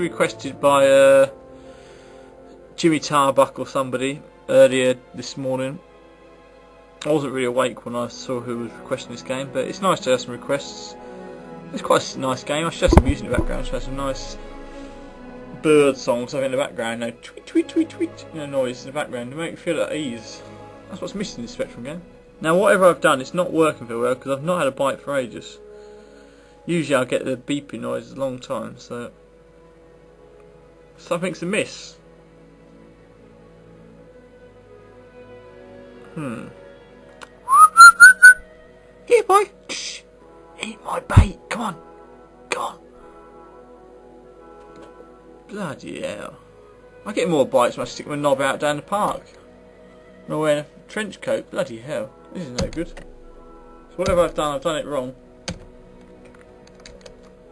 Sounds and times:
Speech: 0:00.0 - 0:01.3, 0:02.8 - 0:05.8, 0:07.0 - 0:10.9, 0:11.7 - 0:14.4, 0:15.5 - 0:25.6, 0:26.7 - 0:29.2, 0:31.0 - 0:32.0, 0:36.2 - 0:36.6, 0:39.1 - 0:41.8, 0:42.5 - 0:42.8, 0:45.5 - 0:46.4, 0:47.0 - 0:49.4, 0:50.3 - 0:53.0, 0:54.0 - 0:55.2
Music: 0:00.0 - 0:57.5
Whistling: 0:37.5 - 0:38.5.

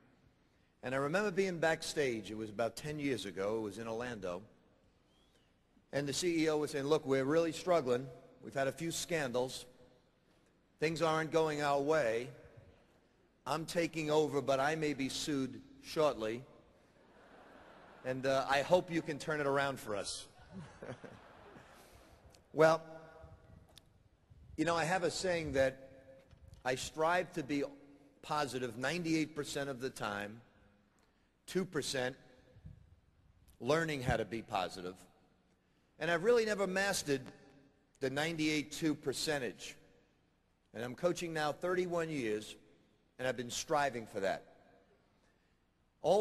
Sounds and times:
Male speech, man speaking: 0:00.8 - 0:04.5, 0:05.9 - 0:09.7, 0:10.8 - 0:12.4, 0:13.4 - 0:16.5, 0:18.0 - 0:20.3, 0:22.6 - 0:22.9, 0:24.6 - 0:25.8, 0:26.6 - 0:30.4, 0:31.5 - 0:32.2, 0:33.6 - 0:35.0, 0:36.0 - 0:37.3, 0:38.0 - 0:39.8, 0:40.8 - 0:42.6, 0:43.2 - 0:44.5.

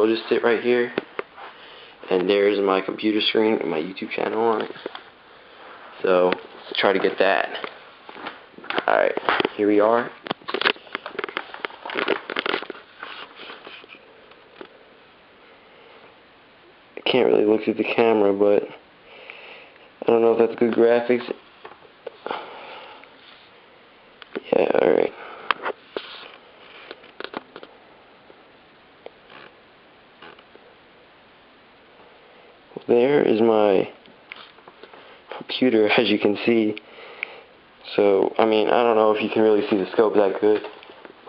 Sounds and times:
Speech: 0:00.0 - 0:01.0, 0:02.1 - 0:04.8, 0:06.0 - 0:07.8, 0:08.8 - 0:10.2, 0:17.0 - 0:18.8, 0:20.0 - 0:21.4, 0:24.4 - 0:25.2, 0:32.7 - 0:34.0, 0:35.3 - 0:36.8, 0:37.8 - 0:40.8
Inside, small room: 0:00.0 - 0:41.2.

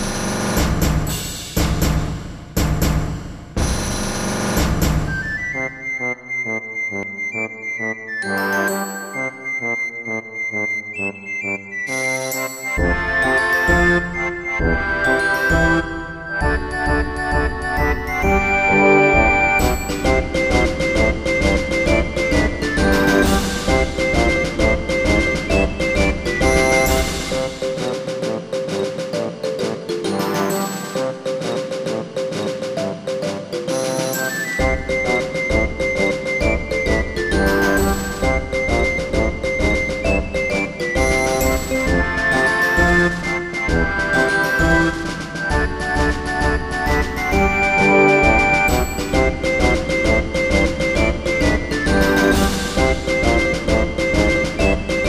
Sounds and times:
Music: 0:00.0 - 0:55.0.

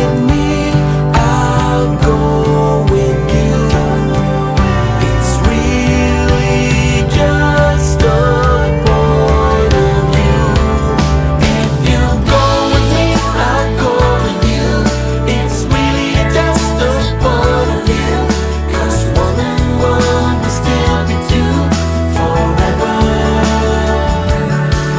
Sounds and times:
Music: 0:00.0 - 0:24.9.

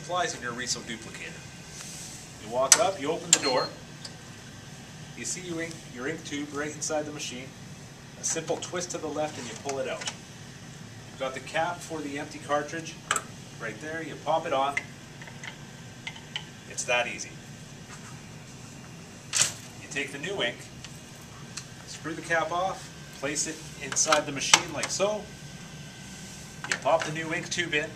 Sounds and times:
Speech: 0:00.0 - 0:01.4, 0:02.4 - 0:03.8, 0:05.2 - 0:07.5, 0:08.2 - 0:10.1, 0:11.2 - 0:13.0, 0:13.6 - 0:14.9, 0:16.7 - 0:17.4, 0:19.8 - 0:20.7, 0:21.9 - 0:25.3, 0:26.7 - 0:27.9.

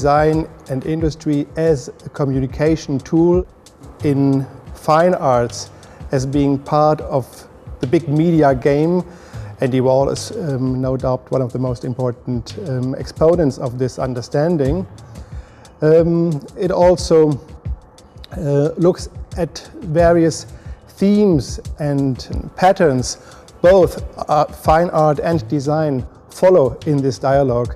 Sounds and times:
Speech: 0:00.0 - 0:14.9, 0:15.8 - 0:17.4, 0:18.3 - 0:27.7
Music: 0:00.0 - 0:27.7.

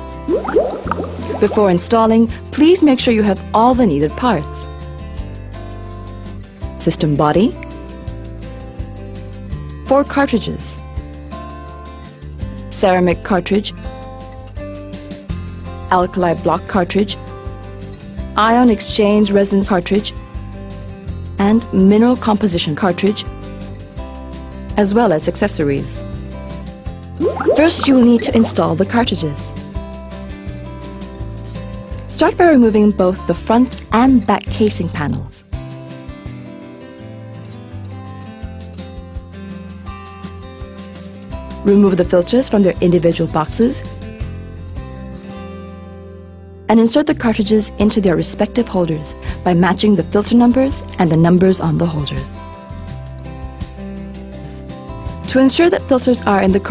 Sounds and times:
Music: 0:00.0 - 0:56.7
Speech: 0:01.4 - 0:04.7, 0:06.8 - 0:07.6, 0:09.9 - 0:10.8, 0:12.7 - 0:13.8, 0:15.9 - 0:17.2, 0:18.4 - 0:20.1, 0:21.4 - 0:23.3, 0:24.8 - 0:26.0, 0:27.6 - 0:29.6, 0:31.5 - 0:35.4, 0:41.7 - 0:43.8, 0:46.7 - 0:52.3, 0:55.3 - 0:56.7.

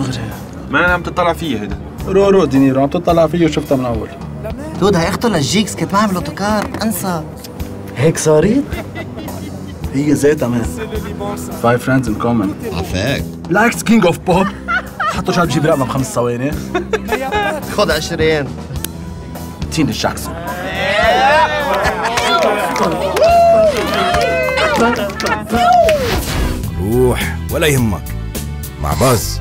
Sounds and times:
Music: 0:00.0 - 0:29.4.

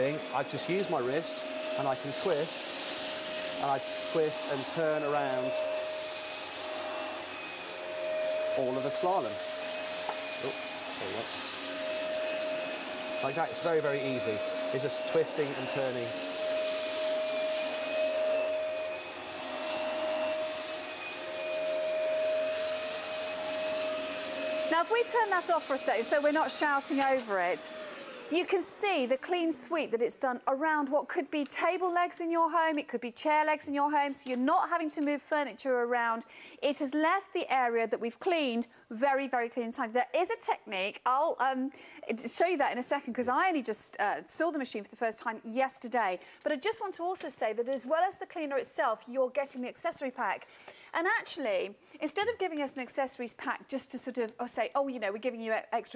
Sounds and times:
Vacuum cleaner: 0:00.0 - 0:30.2
Speech: 0:03.6 - 0:05.6, 0:08.6 - 0:09.4, 0:10.4 - 0:11.3, 0:13.2 - 0:16.2, 0:24.7 - 0:27.6, 0:28.3 - 0:50.4, 0:51.0 - 0:55.9.

